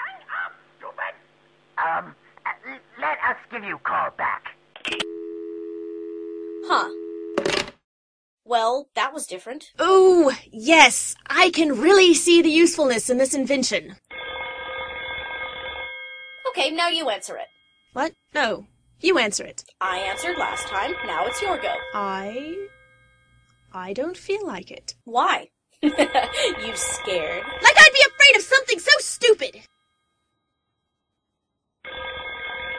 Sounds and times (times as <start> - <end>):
Speech: 8.5 - 14.0, 18.0 - 22.7, 26.4 - 29.6
Telephone bell ringing: 14.1 - 18.0, 19.8 - 23.7, 25.8 - 29.1, 31.9 - 32.7.